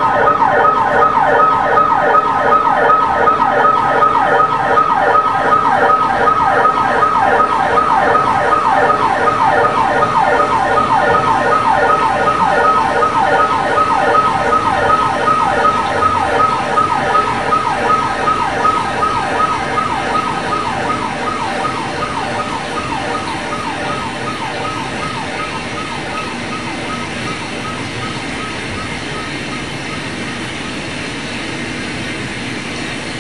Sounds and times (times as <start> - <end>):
Ambulance (siren): 0.0 - 32.7.